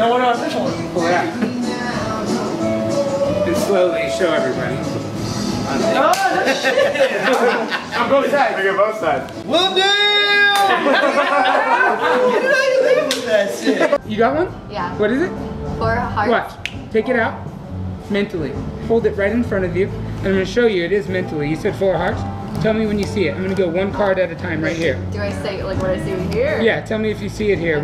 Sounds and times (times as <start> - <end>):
Music: 0.0 - 27.8
Clapping: 6.1 - 6.4, 10.5 - 10.8, 13.0 - 13.4.